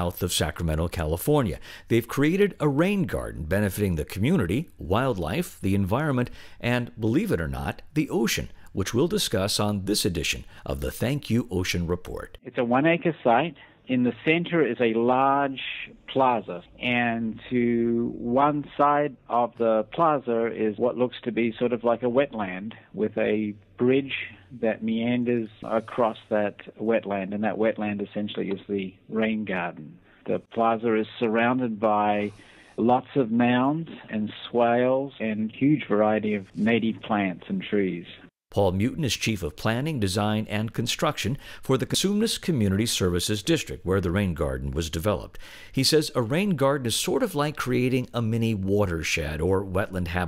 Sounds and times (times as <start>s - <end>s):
Speech: 0.0s - 50.2s.